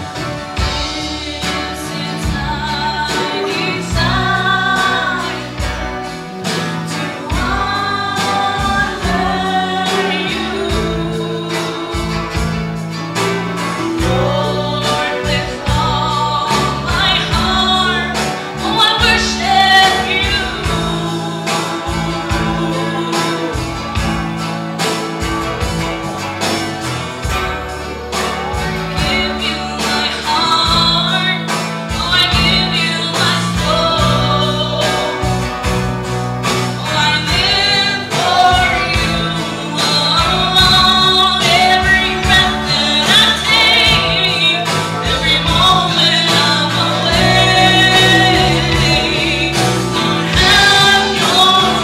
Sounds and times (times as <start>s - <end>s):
Music: 0.0s - 51.8s
Female singing: 0.6s - 5.9s, 6.9s - 12.5s, 13.9s - 23.8s, 28.1s - 35.4s, 36.8s - 51.8s.